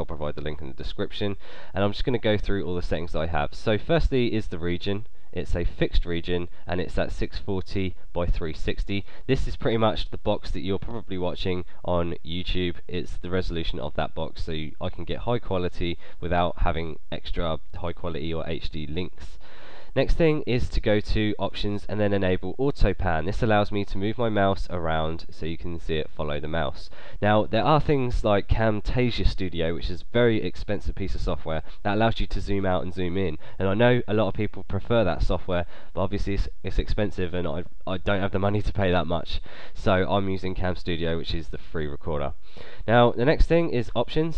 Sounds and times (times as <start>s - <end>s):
Speech: 0.0s - 44.3s.